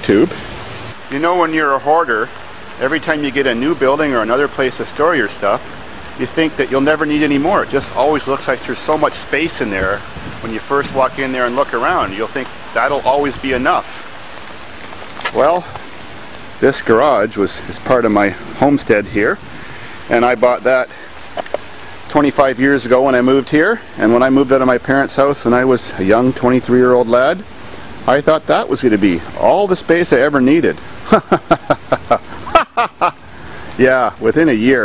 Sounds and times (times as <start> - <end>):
Speech: 0.0 - 0.4, 1.1 - 5.6, 6.2 - 14.1, 15.2 - 15.8, 16.6 - 19.4, 20.1 - 21.0, 22.1 - 30.8, 33.8 - 34.8
Outside, rural or natural: 0.0 - 34.8.